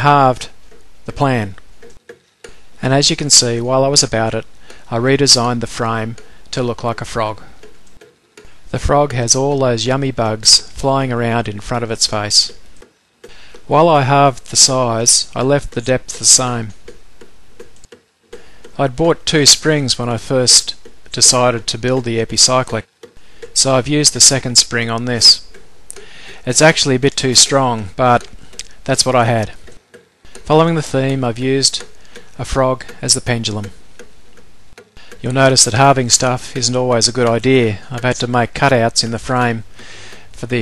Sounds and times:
Speech: 0:00.0 - 0:01.6, 0:02.8 - 0:07.6, 0:08.7 - 0:12.6, 0:13.7 - 0:16.8, 0:18.8 - 0:22.9, 0:23.6 - 0:25.4, 0:26.4 - 0:29.6, 0:30.5 - 0:33.8, 0:35.2 - 0:39.7, 0:40.4 - 0:40.6.

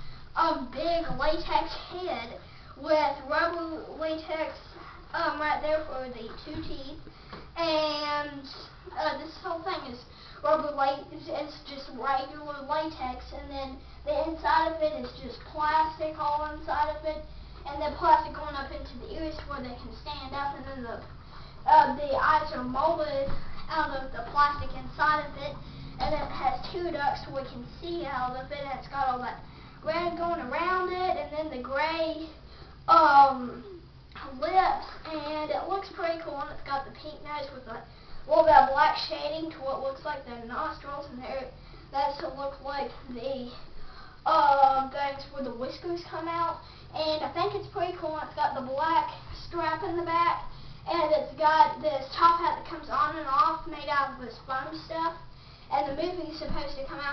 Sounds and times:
Inside, small room: 0:00.0 - 0:57.1
Speech: 0:00.4 - 0:21.1, 0:21.7 - 0:57.1.

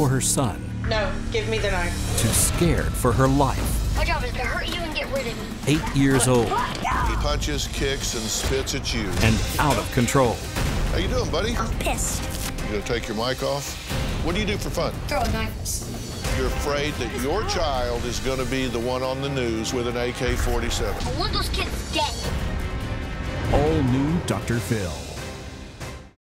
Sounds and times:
Music: 0:00.0 - 0:26.2.

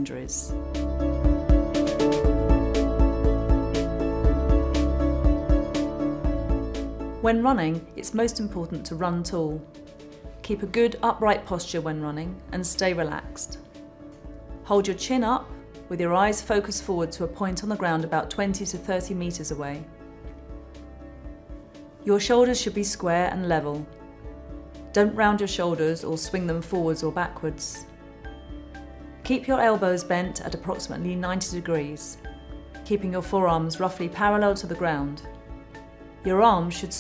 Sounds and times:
Speech: 0:00.0 - 0:00.5, 0:07.2 - 0:09.7, 0:10.5 - 0:13.6, 0:14.7 - 0:19.9, 0:22.1 - 0:23.9, 0:25.0 - 0:27.9, 0:29.3 - 0:32.2, 0:32.9 - 0:35.3, 0:36.3 - 0:37.0
Music: 0:00.0 - 0:37.0.

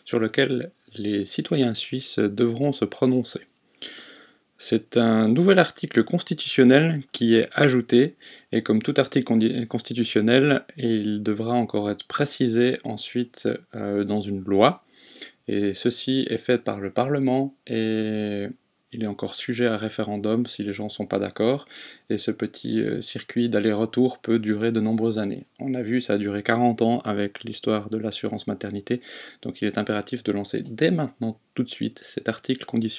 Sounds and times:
Speech: 0:00.0 - 0:03.5, 0:04.6 - 0:32.9.

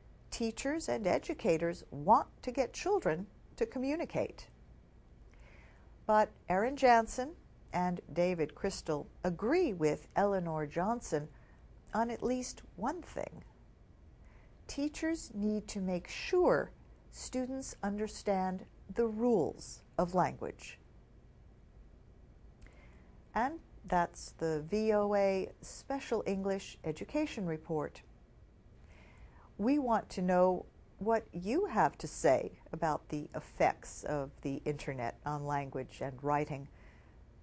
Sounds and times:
Speech: 0:00.3 - 0:04.5, 0:06.1 - 0:11.3, 0:11.9 - 0:13.4, 0:14.7 - 0:20.8, 0:23.4 - 0:28.0, 0:29.6 - 0:36.7.

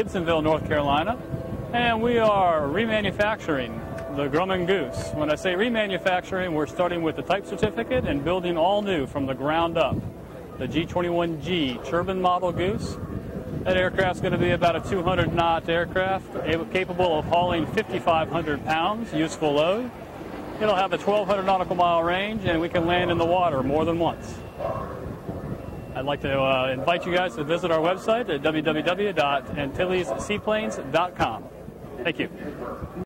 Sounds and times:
Speech: 0:00.0 - 0:10.0, 0:10.6 - 0:13.0, 0:13.7 - 0:19.9, 0:20.6 - 0:24.4, 0:26.0 - 0:33.0.

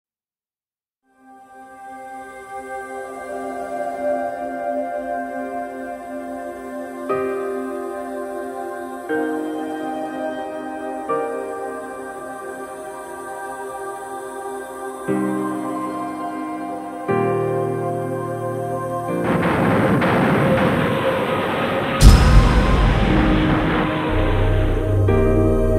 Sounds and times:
New-age music: 0:01.2 - 0:25.7.

